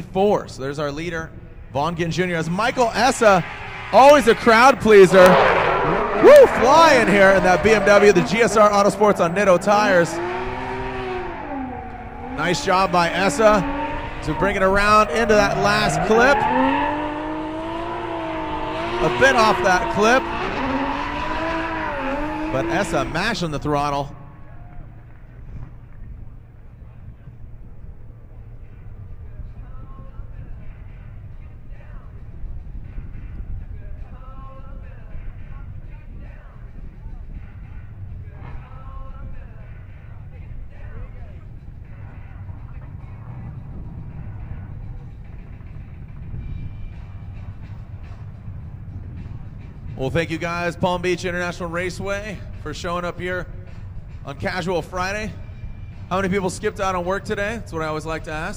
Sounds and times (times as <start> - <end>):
Speech: 0.0 - 5.5, 6.2 - 10.2, 12.4 - 13.6, 14.2 - 16.5, 19.0 - 20.3, 22.5 - 24.2, 50.0 - 53.5, 54.2 - 55.4, 56.1 - 58.5
Skidding: 0.0 - 27.6, 28.3 - 58.5
Race car, auto racing: 0.0 - 58.5.